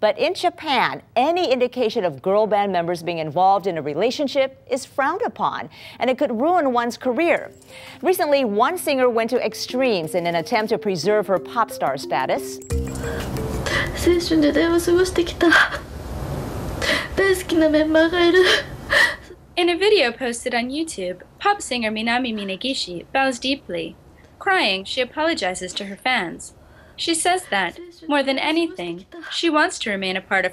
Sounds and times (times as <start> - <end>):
Speech: 0.0 - 12.6, 19.6 - 30.5.